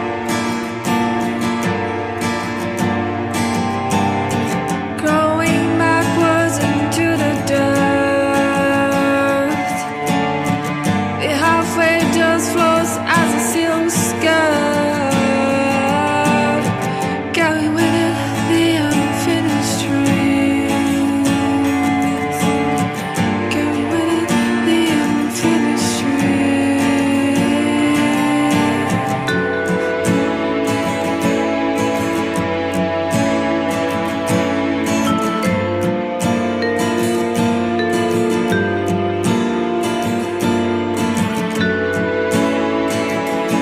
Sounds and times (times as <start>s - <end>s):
Soul music: 0.0s - 43.6s.